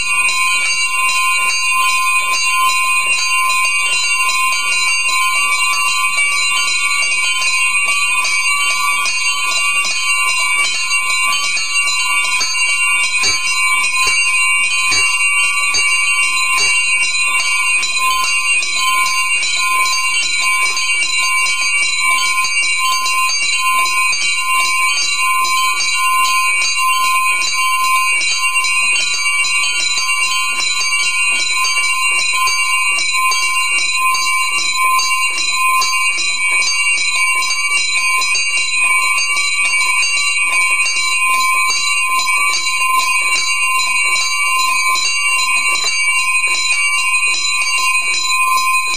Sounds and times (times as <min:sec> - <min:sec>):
Bell: 0:00.0 - 0:48.9.